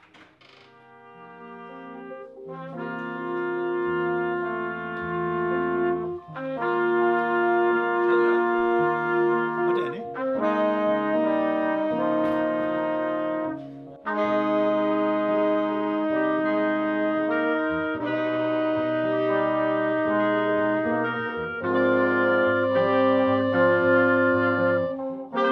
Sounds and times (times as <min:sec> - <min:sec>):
Jazz: 0:00.0 - 0:25.5
Musical instrument: 0:00.8 - 0:25.5
Speech: 0:09.6 - 0:10.2.